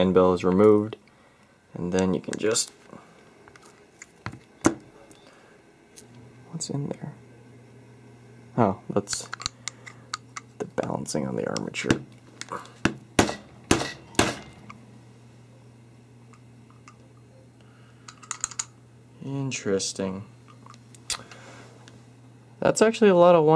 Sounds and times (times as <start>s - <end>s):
Speech: 0.0s - 1.0s, 1.7s - 2.8s, 6.4s - 7.2s, 8.6s - 9.3s, 10.6s - 12.0s, 19.2s - 20.3s, 22.6s - 23.5s.